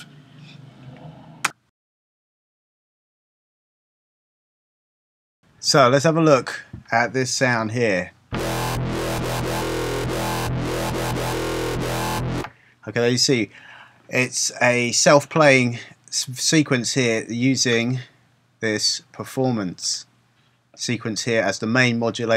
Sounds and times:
Speech: 5.6s - 8.2s, 12.8s - 13.5s, 14.1s - 20.1s, 20.8s - 22.3s
Dubstep: 8.3s - 12.5s.

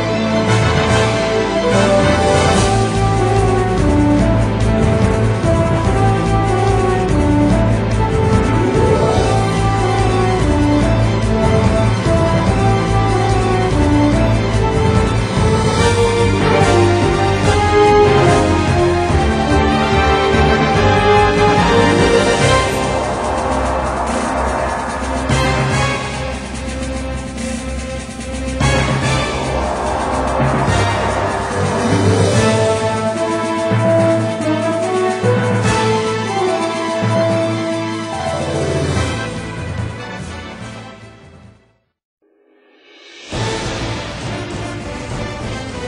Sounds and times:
Music: 0.0s - 45.8s.

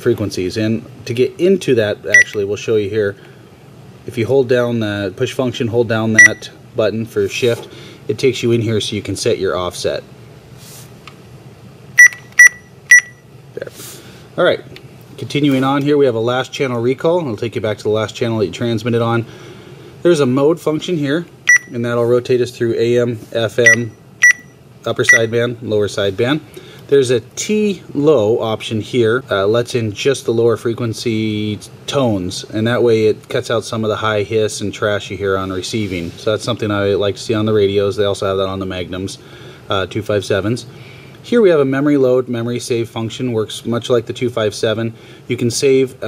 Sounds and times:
Speech: 0.0s - 3.2s, 4.0s - 10.1s, 13.5s - 13.8s, 14.4s - 19.3s, 20.0s - 23.9s, 24.8s - 46.0s.

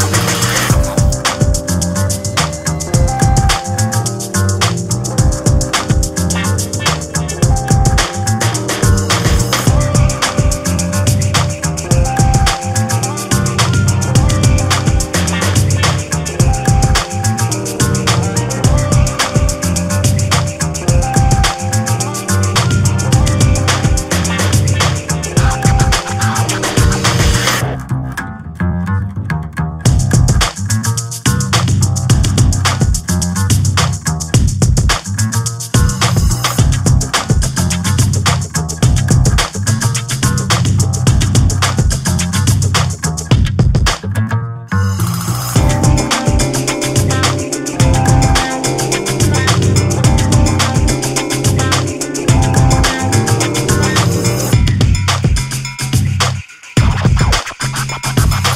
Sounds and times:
Music: 0.0s - 58.5s.

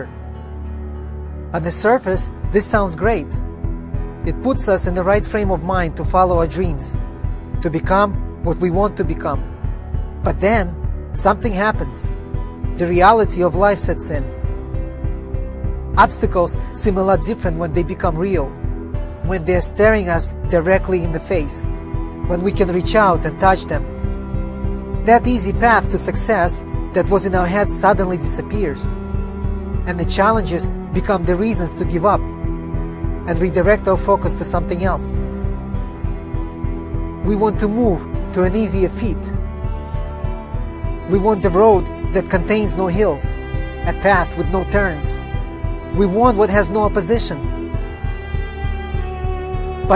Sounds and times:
Music: 0.0s - 49.9s
Male speech, man speaking: 1.6s - 3.4s, 4.2s - 7.0s, 7.6s - 9.4s, 10.2s - 12.1s, 12.8s - 14.3s, 16.0s - 18.6s, 19.3s - 21.7s, 22.3s - 23.9s, 25.1s - 28.9s, 29.9s - 32.2s, 33.3s - 35.2s, 37.2s - 39.4s, 41.1s - 45.2s, 46.0s - 47.5s.

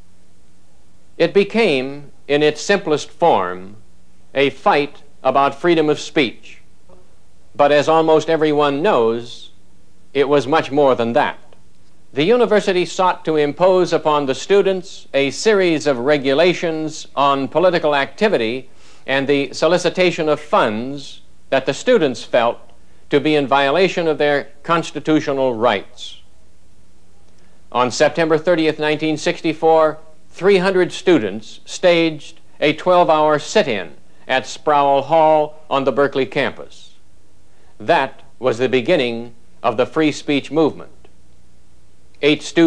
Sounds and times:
Narration, monologue: 0.0s - 42.6s
Male speech, man speaking: 1.2s - 3.8s, 4.4s - 6.6s, 7.6s - 9.6s, 10.2s - 11.5s, 12.2s - 26.3s, 27.8s - 37.0s, 37.8s - 41.0s, 42.2s - 42.6s.

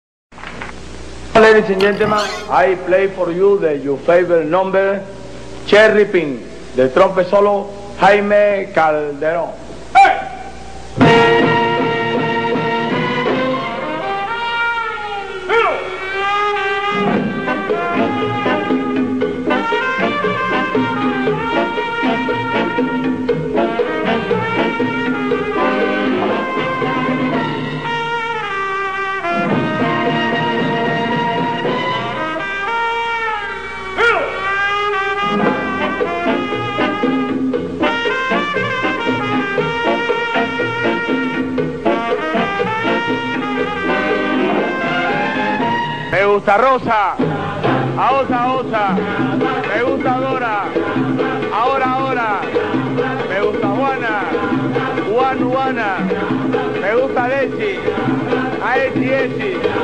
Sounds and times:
Pig: 1.8s - 2.6s.

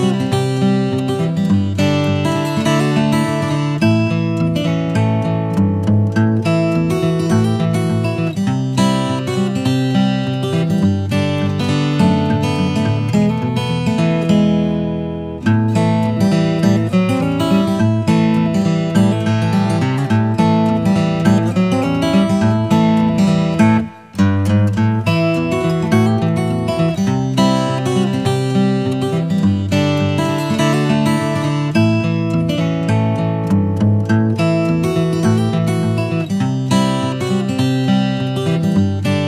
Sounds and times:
Music: 0.0s - 39.2s.

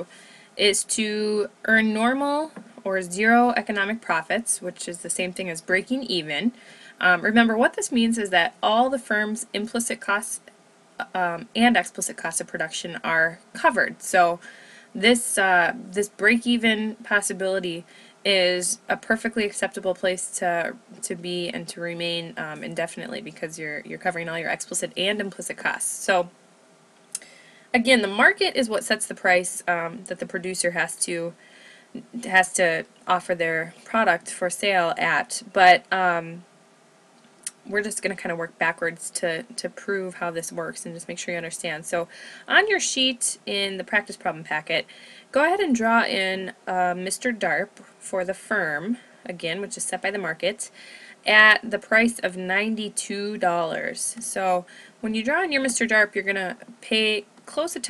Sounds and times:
Speech: 0.0s - 14.4s, 15.0s - 26.3s, 27.8s - 31.4s, 32.0s - 36.4s, 37.5s - 57.8s.

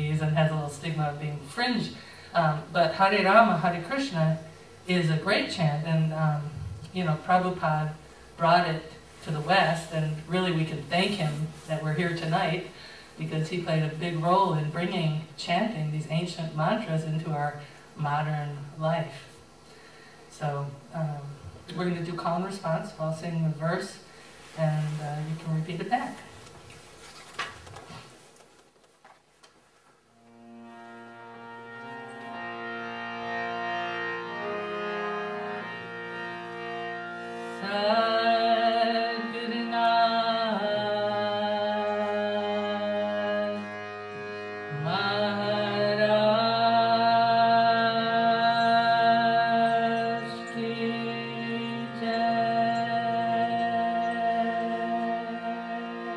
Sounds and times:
Speech: 0.0s - 19.3s, 20.3s - 24.0s, 24.6s - 26.3s.

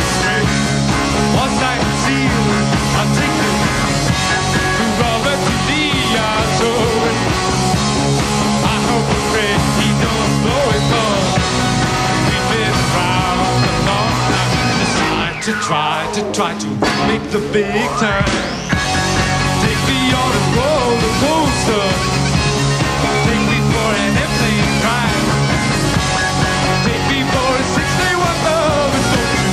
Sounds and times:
Music: 0.0s - 29.5s.

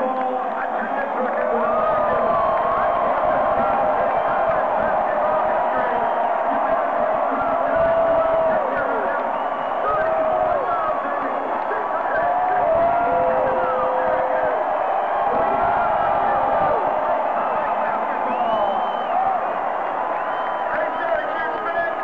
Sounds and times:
Speech: 0.0s - 14.6s, 15.3s - 19.0s, 20.7s - 22.0s
Crowd: 0.0s - 22.0s.

